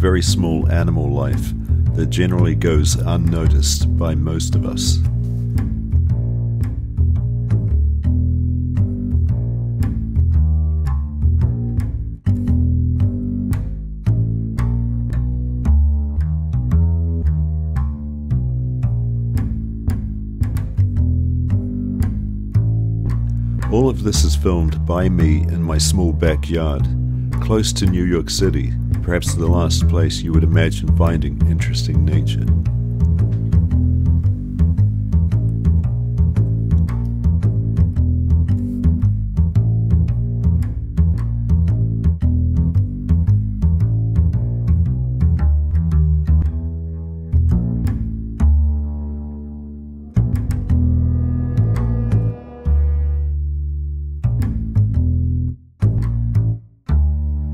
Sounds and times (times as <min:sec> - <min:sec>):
Music: 0:00.0 - 0:57.5.